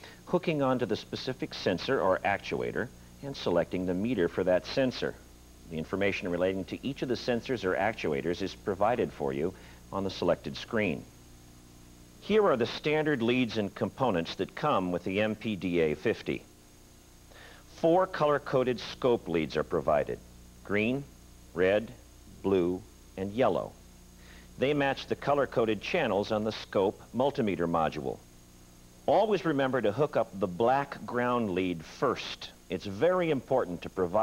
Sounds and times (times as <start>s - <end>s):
Speech: 0.0s - 11.1s, 12.2s - 16.5s, 17.7s - 23.8s, 24.6s - 28.2s, 29.1s - 34.2s.